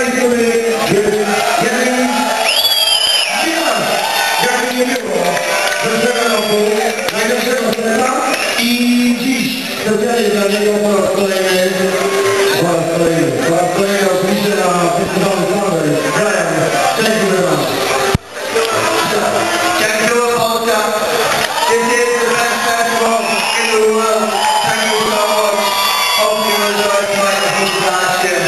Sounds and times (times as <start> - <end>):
Speech: 0.0 - 2.4, 3.3 - 17.7, 18.5 - 28.4.